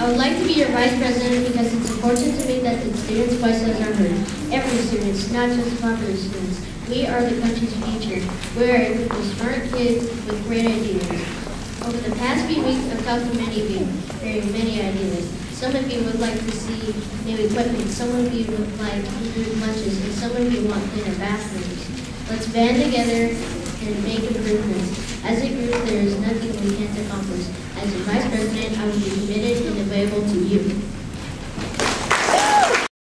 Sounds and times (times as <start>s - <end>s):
Child speech, kid speaking: 0.0s - 30.9s
Narration, monologue: 0.0s - 31.6s.